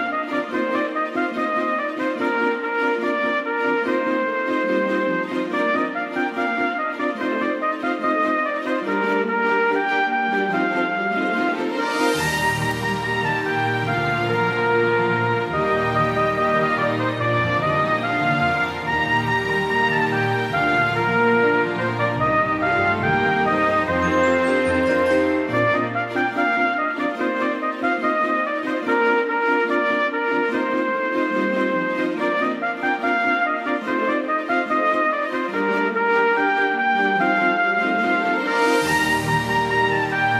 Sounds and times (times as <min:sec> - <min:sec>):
Christmas music: 0:00.0 - 0:40.3.